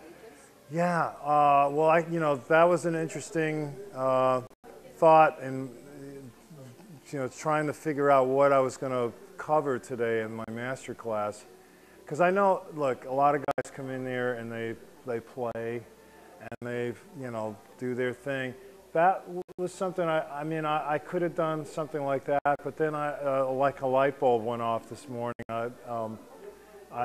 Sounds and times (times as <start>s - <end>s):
Speech: 0.0s - 11.5s, 12.1s - 27.0s.